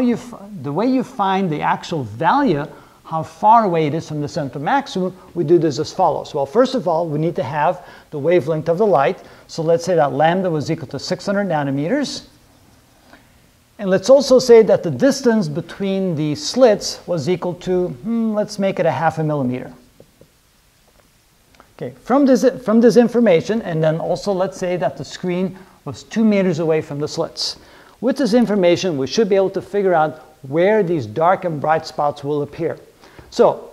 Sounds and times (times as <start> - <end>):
Speech: 0.0 - 12.4, 13.8 - 19.8, 21.8 - 33.7.